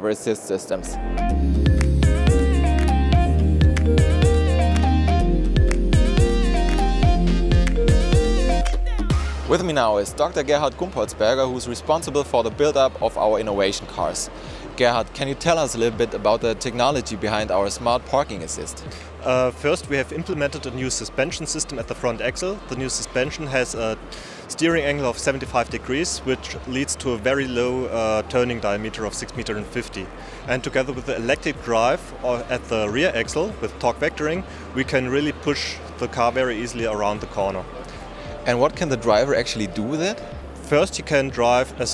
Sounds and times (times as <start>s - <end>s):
Speech: 0.0s - 1.0s, 9.3s - 37.7s, 38.4s - 41.9s
Music: 0.7s - 41.9s.